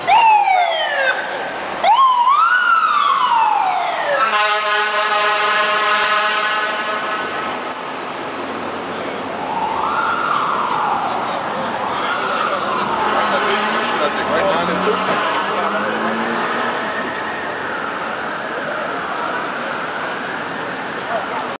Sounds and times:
Fire engine, fire truck (siren): 0:00.0 - 0:08.1, 0:08.8 - 0:21.5
Car: 0:02.6 - 0:21.5
Truck: 0:03.2 - 0:09.5, 0:10.5 - 0:21.5.

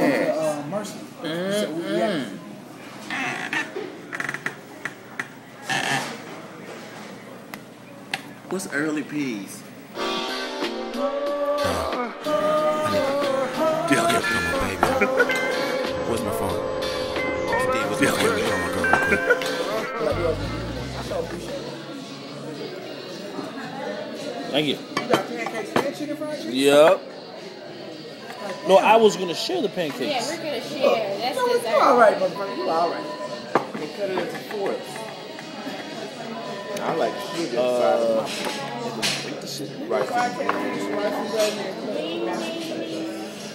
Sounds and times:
Music: 0:09.9 - 0:21.9.

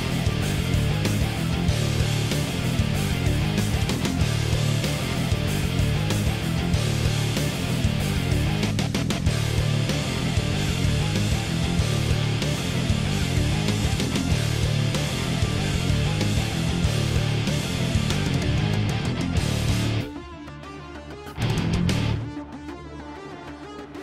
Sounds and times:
Music: 0:00.0 - 0:24.0.

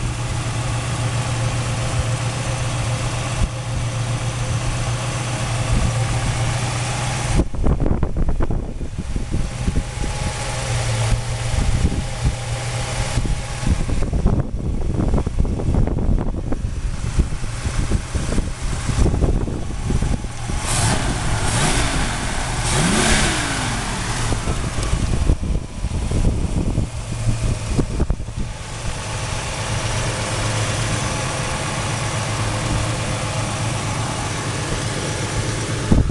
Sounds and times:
Idling: 0:00.0 - 0:36.1.

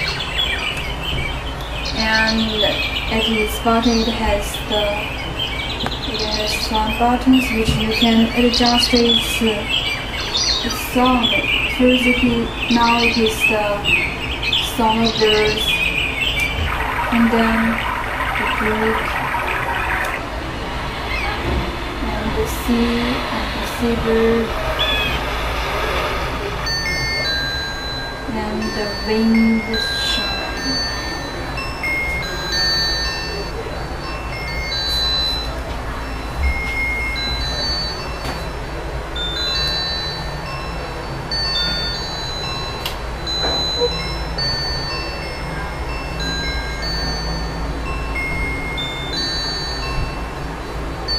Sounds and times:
Chirp, tweet: 0:00.0 - 0:20.2.

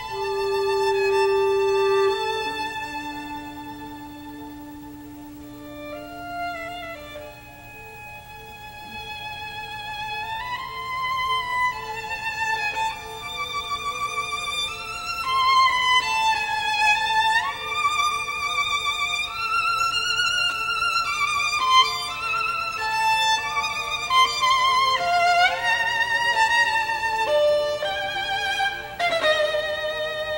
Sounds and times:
Violin, fiddle: 0:00.0 - 0:30.3.

